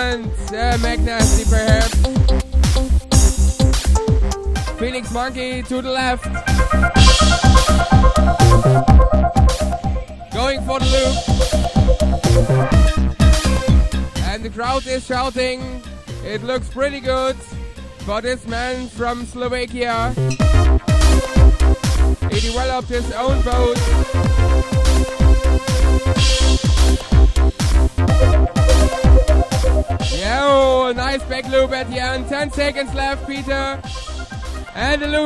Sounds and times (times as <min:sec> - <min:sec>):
Speech: 0:00.0 - 0:02.0, 0:04.8 - 0:06.2, 0:10.4 - 0:11.2, 0:14.2 - 0:20.2, 0:22.3 - 0:23.9, 0:30.2 - 0:33.8, 0:34.8 - 0:35.2
Music: 0:00.0 - 0:35.2.